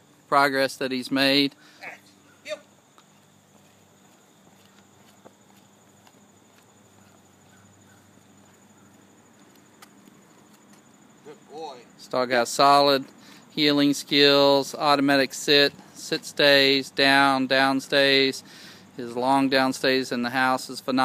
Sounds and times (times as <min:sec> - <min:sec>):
Speech: 0:11.3 - 0:18.4, 0:19.0 - 0:21.0.